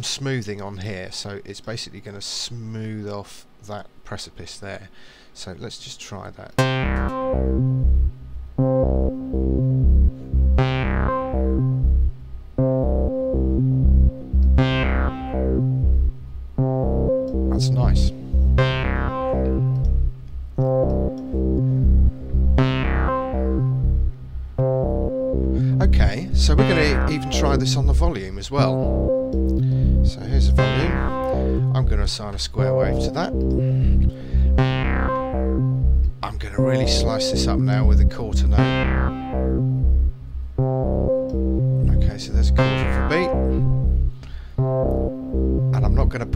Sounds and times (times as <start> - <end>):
Speech: 0.0 - 6.6, 17.5 - 18.2, 25.8 - 29.0, 30.1 - 33.4, 36.2 - 38.8, 41.8 - 43.6, 45.7 - 46.3
Synthesizer: 6.6 - 46.3.